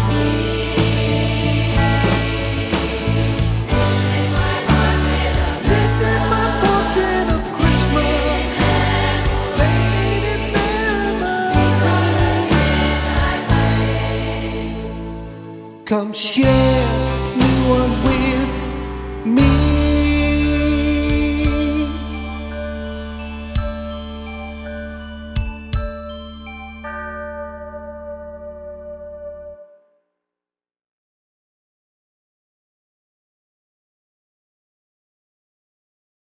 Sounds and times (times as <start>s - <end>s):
Music: 0.0s - 30.2s.